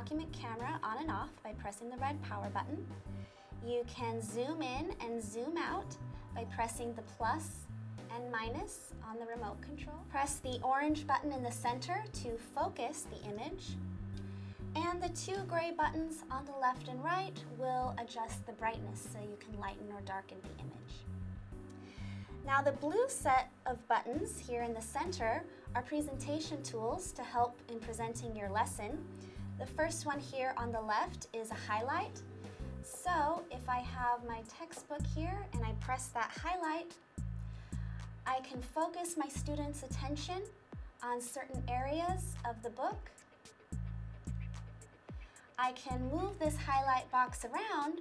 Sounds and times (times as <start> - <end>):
Speech: 0.0 - 2.9, 3.6 - 13.8, 14.8 - 21.0, 22.5 - 29.0, 29.6 - 32.2, 32.9 - 37.0, 38.3 - 43.2, 45.6 - 48.0
Music: 0.0 - 48.0.